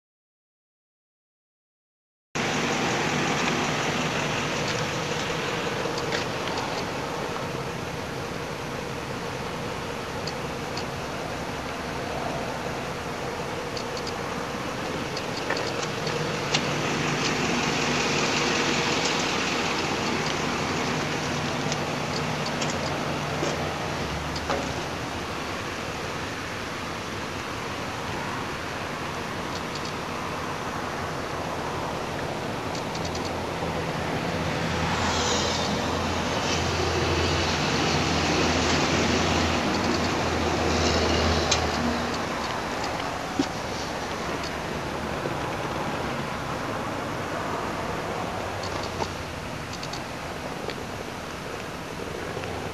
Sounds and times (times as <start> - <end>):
Vehicle: 2.4 - 52.7.